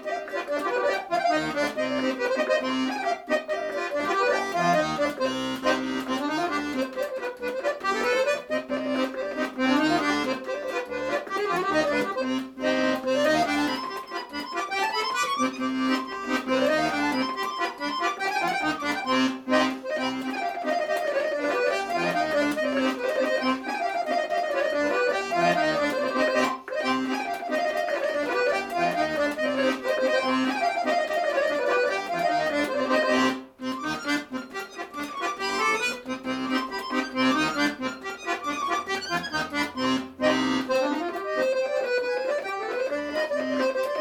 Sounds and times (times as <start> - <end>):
Music: 0.0 - 44.0.